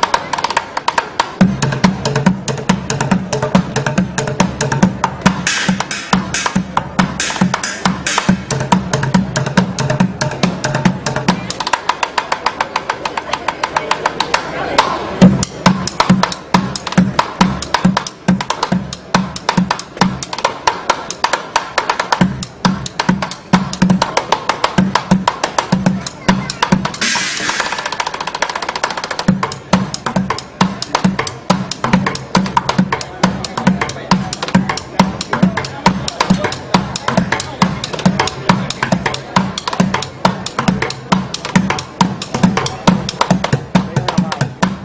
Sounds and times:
Music: 0.0 - 44.8
Speech: 10.8 - 16.9, 25.4 - 27.1, 29.5 - 44.8.

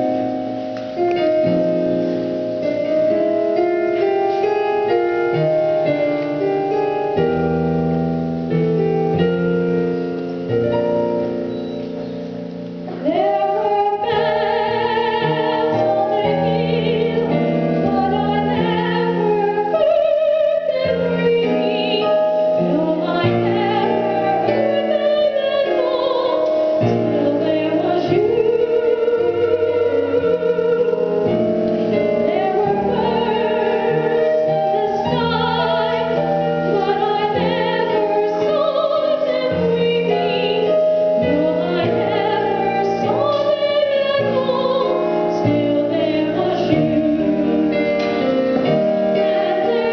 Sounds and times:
Music: 0.0 - 49.9
Female singing: 13.0 - 31.0, 32.2 - 47.8, 49.2 - 49.9.

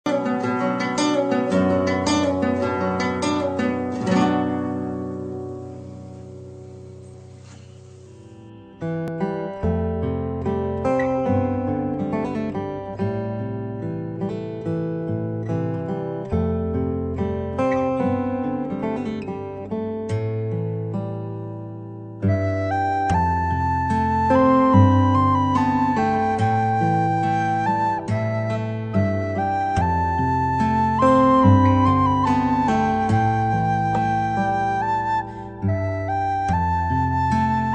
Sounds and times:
Zither: 0.1 - 8.7.

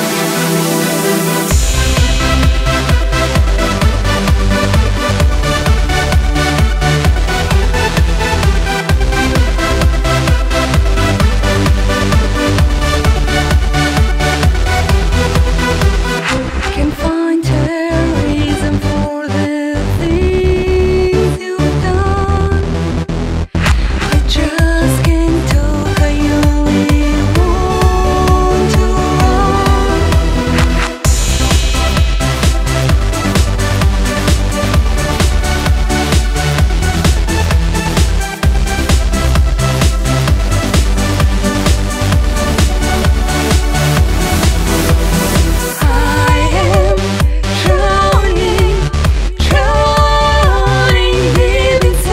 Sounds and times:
Music: 0.0 - 52.1.

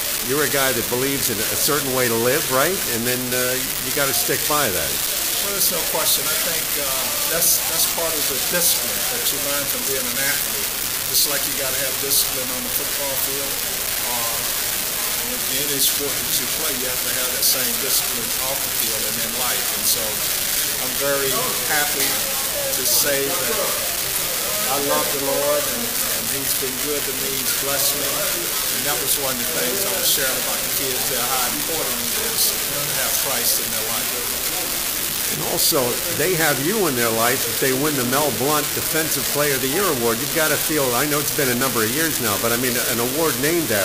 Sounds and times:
Speech: 0.0 - 14.6, 15.2 - 43.8.

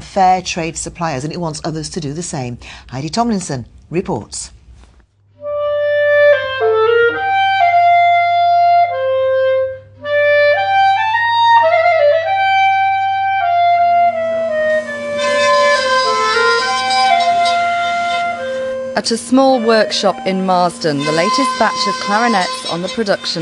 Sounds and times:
Speech: 0.0 - 4.6, 19.0 - 23.4
Music: 5.3 - 23.4.

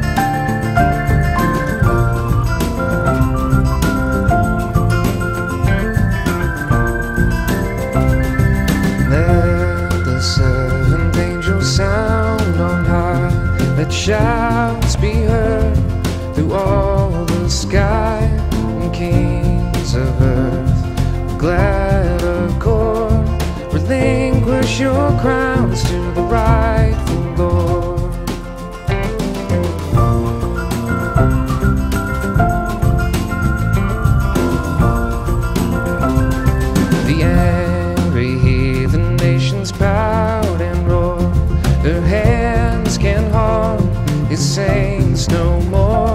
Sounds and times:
Music: 0.0 - 46.1.

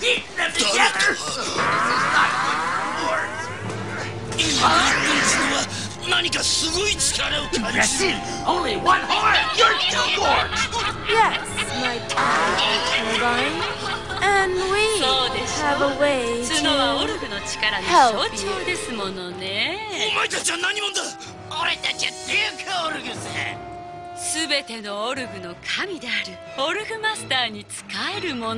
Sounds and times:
Speech: 0.0 - 10.5, 14.2 - 23.5, 24.2 - 28.5
Music: 0.0 - 28.5.

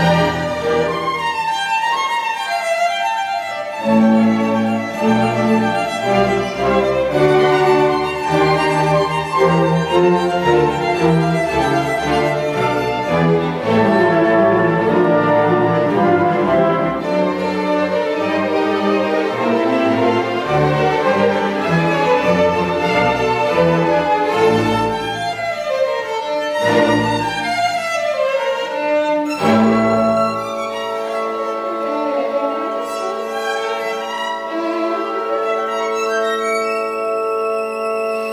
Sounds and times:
Violin, fiddle: 0.0 - 38.3.

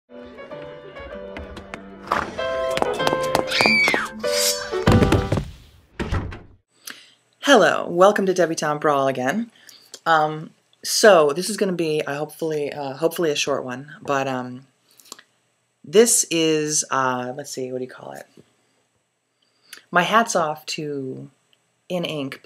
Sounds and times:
Music: 0.1 - 5.5
Speech: 7.4 - 14.7, 15.9 - 18.3, 19.8 - 22.4.

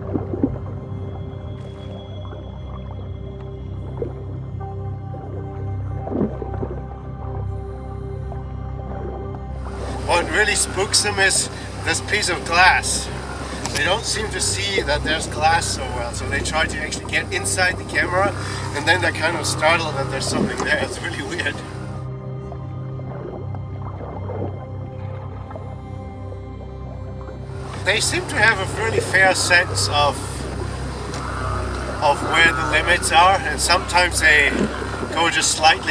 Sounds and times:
Music: 0.0 - 35.9
Speech: 10.0 - 21.7, 27.8 - 30.4, 32.0 - 35.9.

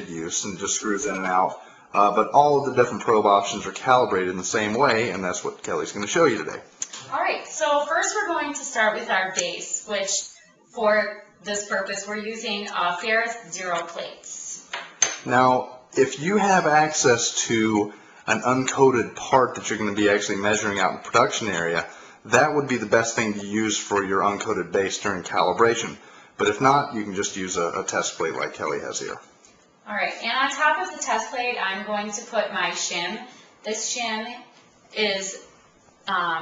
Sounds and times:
Speech: 0.0 - 29.3, 29.9 - 35.4, 36.1 - 36.4.

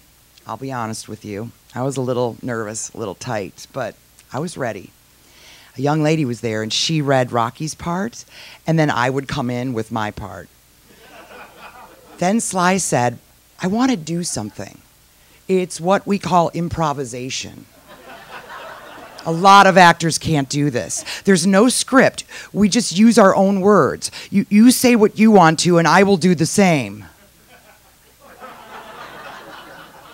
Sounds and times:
Speech: 0.4 - 4.9, 5.8 - 10.5, 12.2 - 14.8, 15.5 - 17.7, 19.2 - 27.1
Laughter: 10.9 - 12.2, 17.8 - 19.3, 27.2 - 30.1.

